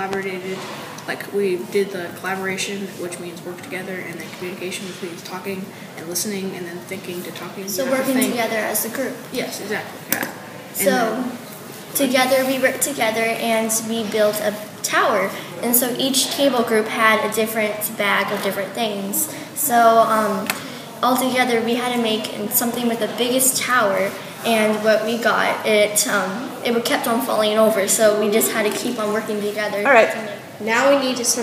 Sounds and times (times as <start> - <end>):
Speech: 0.0 - 11.4, 12.0 - 31.4.